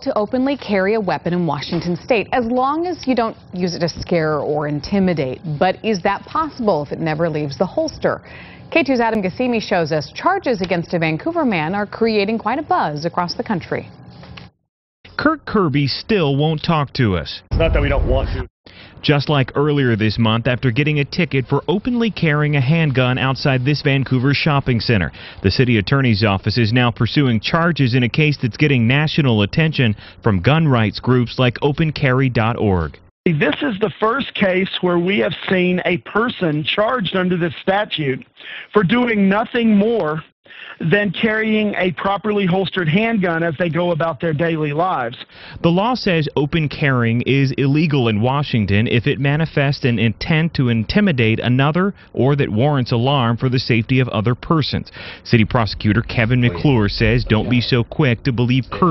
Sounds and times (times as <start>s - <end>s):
Speech: 0.0s - 13.9s, 15.2s - 58.9s.